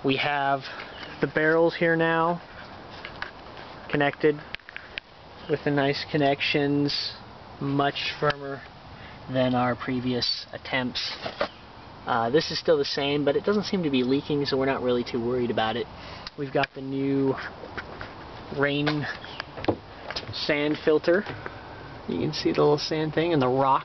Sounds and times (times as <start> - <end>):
Speech: 0.0 - 2.4, 3.9 - 4.5, 5.5 - 8.7, 9.3 - 11.3, 12.1 - 17.5, 18.5 - 19.2, 20.3 - 21.3, 22.1 - 23.8.